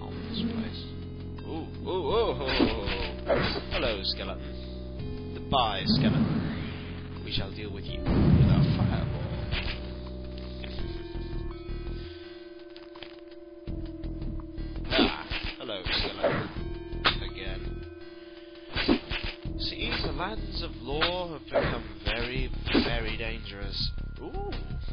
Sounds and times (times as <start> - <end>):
Music: 0.0 - 24.9.